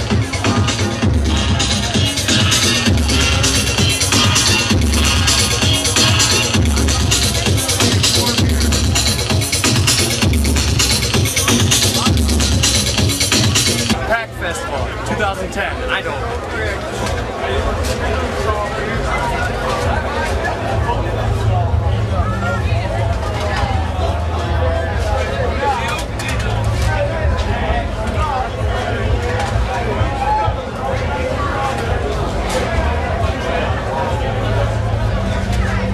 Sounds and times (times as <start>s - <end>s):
Speech: 0.1s - 9.4s, 13.9s - 35.9s.